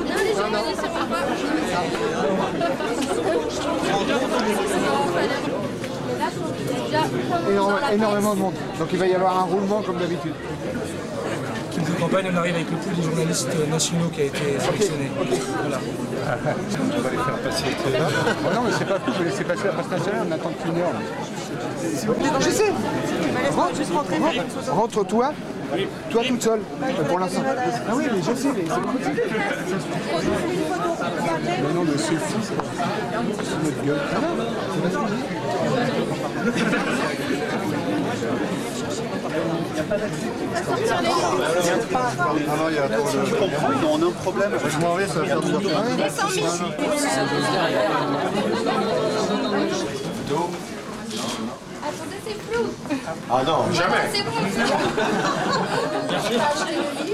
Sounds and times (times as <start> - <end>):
Speech: 0.0 - 57.1.